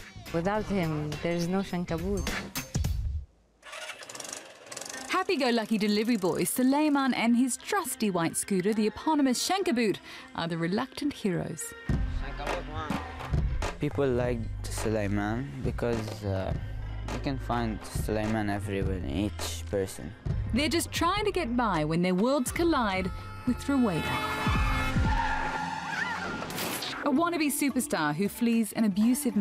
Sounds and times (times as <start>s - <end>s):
Music: 0.0s - 3.3s, 5.1s - 29.4s.